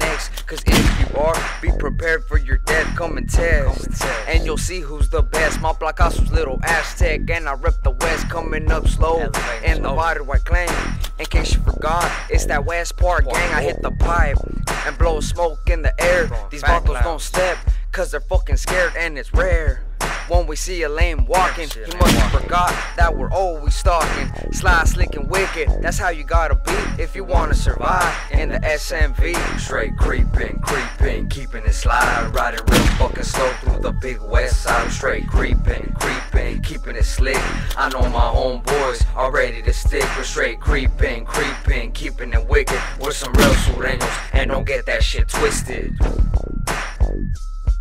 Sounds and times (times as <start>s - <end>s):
Music: 0.0s - 47.8s.